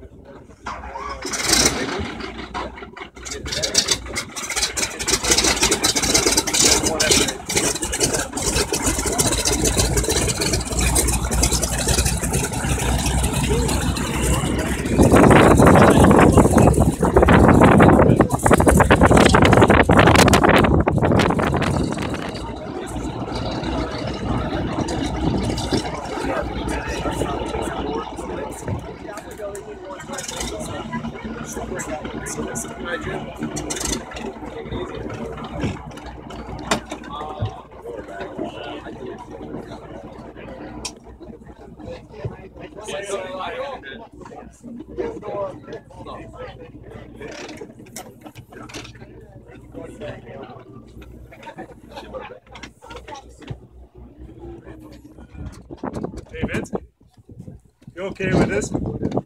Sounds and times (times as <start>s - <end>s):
Speech: 0.0s - 20.4s, 21.6s - 59.2s
Boat, Water vehicle: 0.0s - 59.2s
Outside, rural or natural: 0.0s - 59.2s.